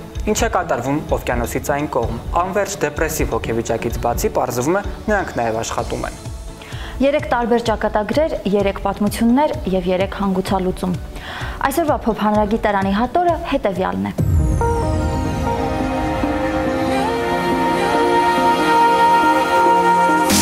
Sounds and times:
Music: 0:00.0 - 0:20.4.

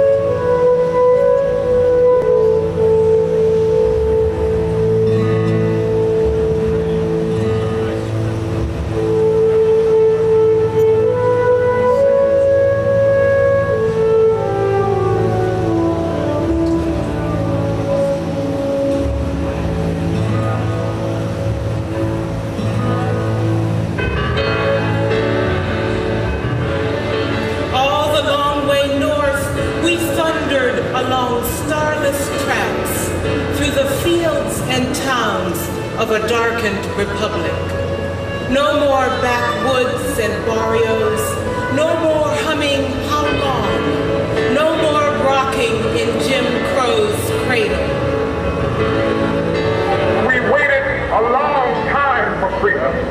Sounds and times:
Music: 0:00.0 - 0:53.1.

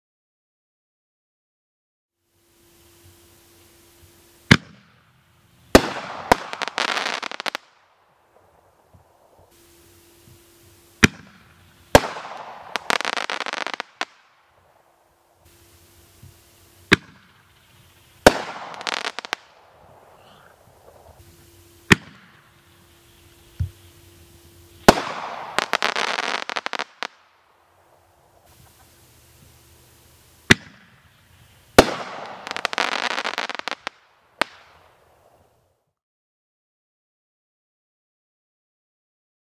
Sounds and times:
Fireworks: 0:02.8 - 0:35.6.

